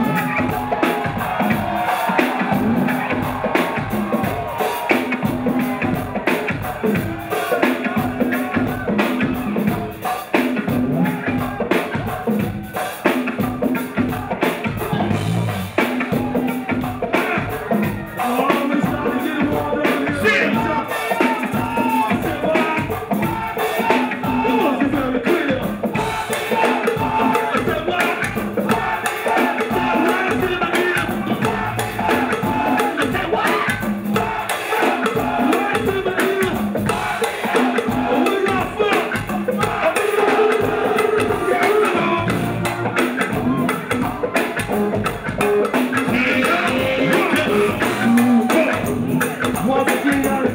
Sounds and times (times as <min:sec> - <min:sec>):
Music: 0:00.0 - 0:50.5.